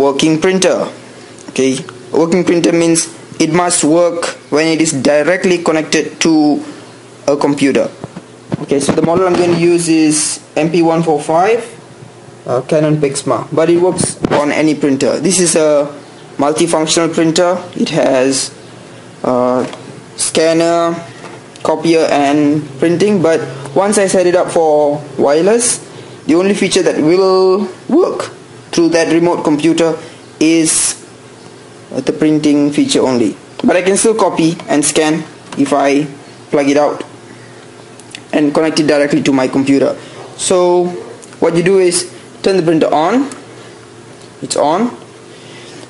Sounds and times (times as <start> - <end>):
Speech: 0.0 - 8.0, 8.6 - 11.8, 12.4 - 18.6, 19.2 - 31.1, 31.9 - 37.1, 38.2 - 43.4, 44.4 - 45.0.